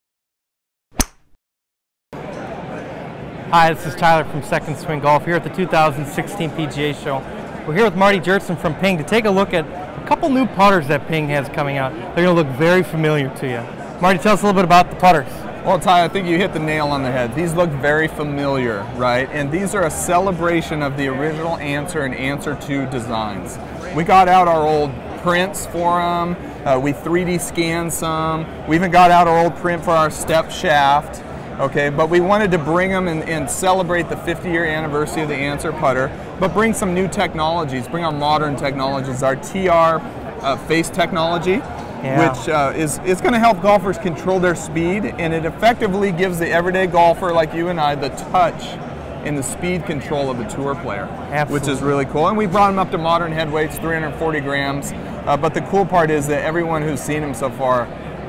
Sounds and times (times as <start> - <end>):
Speech: 3.5 - 58.2.